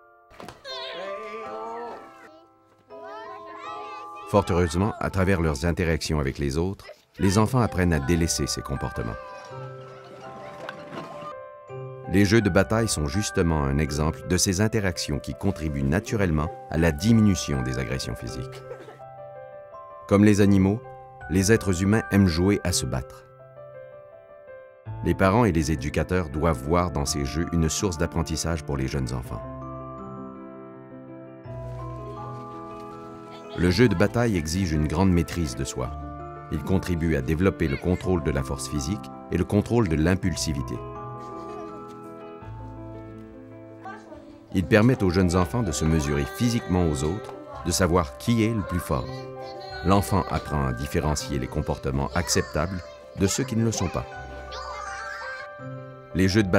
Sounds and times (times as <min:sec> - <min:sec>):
Music: 0:00.0 - 0:56.5.